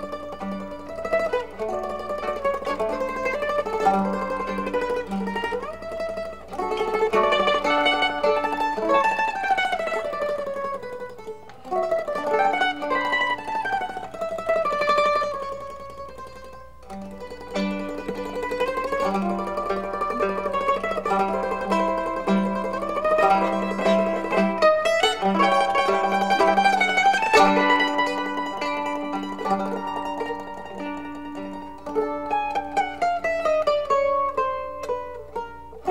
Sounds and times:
Mandolin: 0:00.0 - 0:35.9.

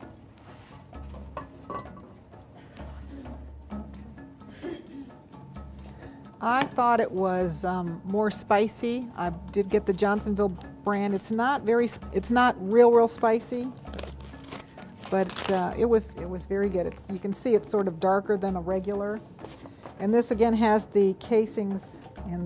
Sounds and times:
Music: 0:00.0 - 0:22.4.

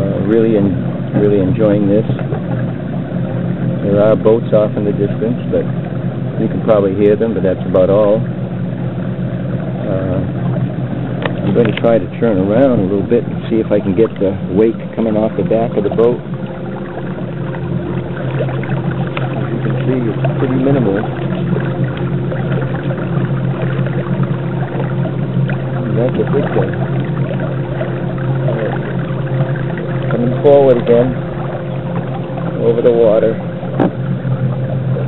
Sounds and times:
Speech: 0:00.0 - 0:02.2, 0:03.8 - 0:05.7, 0:06.4 - 0:08.3, 0:09.9 - 0:10.3, 0:11.5 - 0:16.2, 0:19.5 - 0:21.1, 0:25.8 - 0:26.8, 0:30.1 - 0:31.2, 0:32.6 - 0:33.4
Boat, Water vehicle: 0:00.0 - 0:35.0.

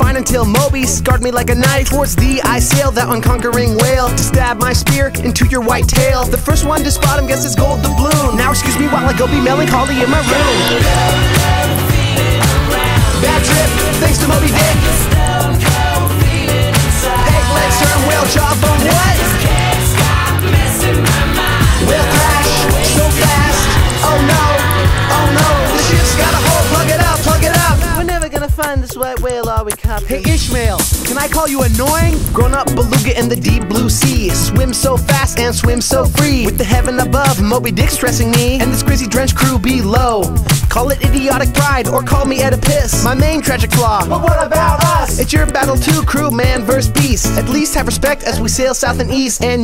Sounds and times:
Music: 0:00.0 - 0:49.6.

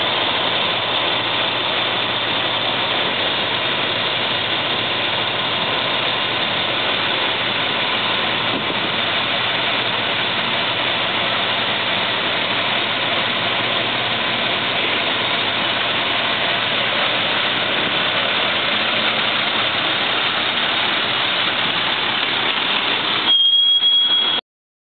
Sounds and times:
Truck: 0:00.0 - 0:24.4.

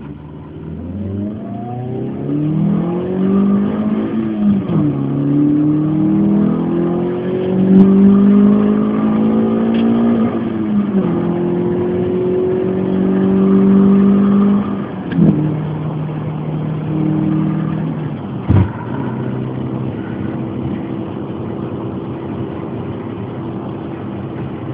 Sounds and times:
Outside, urban or manmade: 0:00.0 - 0:24.7.

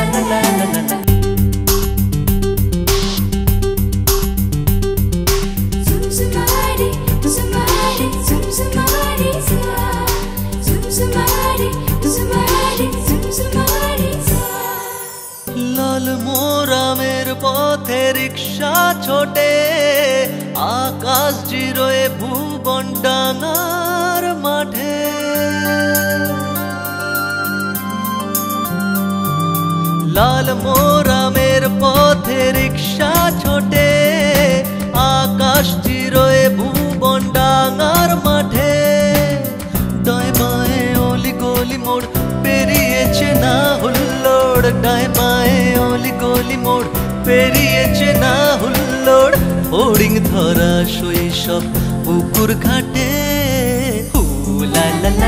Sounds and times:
Singing: 0:00.0 - 0:01.1, 0:05.9 - 0:26.6, 0:30.1 - 0:55.2.

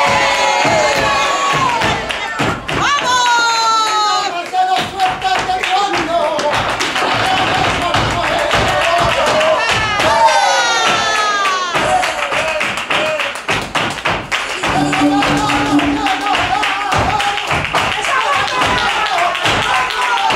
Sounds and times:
Music: 0:14.7 - 0:17.8.

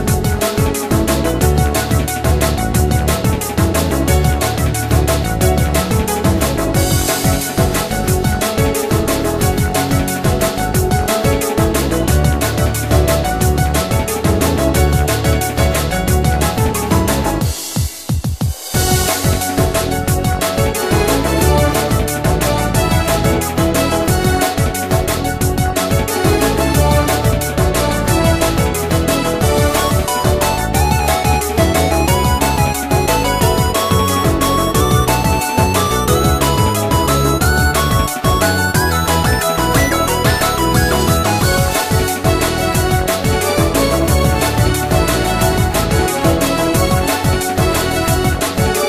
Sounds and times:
Music: 0:00.0 - 0:48.8.

